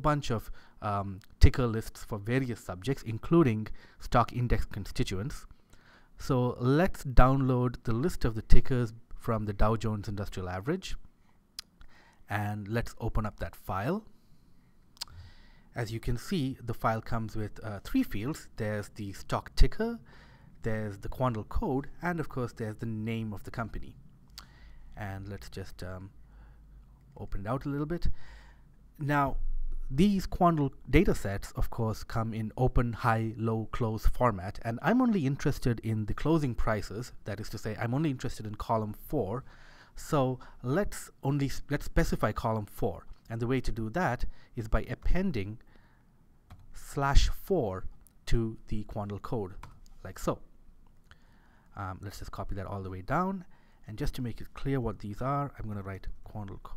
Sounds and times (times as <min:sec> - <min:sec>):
Speech: 0:00.0 - 0:05.5, 0:06.2 - 0:11.1, 0:12.3 - 0:14.1, 0:15.8 - 0:24.0, 0:25.0 - 0:26.2, 0:27.2 - 0:28.2, 0:29.0 - 0:45.6, 0:46.8 - 0:50.5, 0:51.8 - 0:56.7.